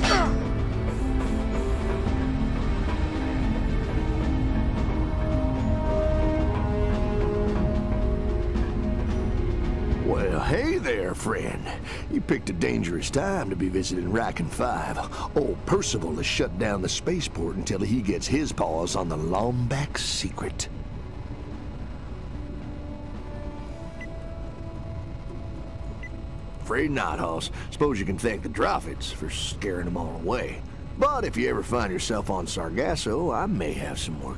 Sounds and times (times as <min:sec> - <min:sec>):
Speech: 0:10.0 - 0:20.7, 0:26.6 - 0:34.3.